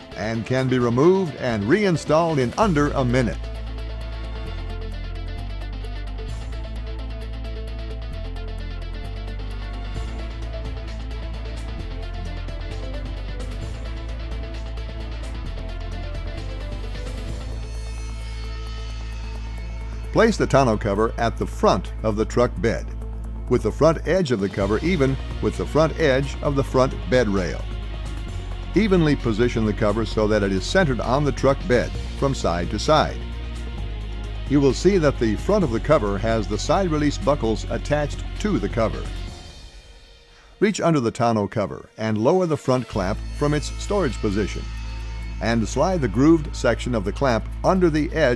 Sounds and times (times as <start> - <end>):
Music: 0.0 - 48.3
Speech: 0.2 - 3.4, 20.2 - 22.9, 23.5 - 27.6, 28.8 - 33.2, 34.5 - 39.1, 40.6 - 44.6, 45.4 - 48.3.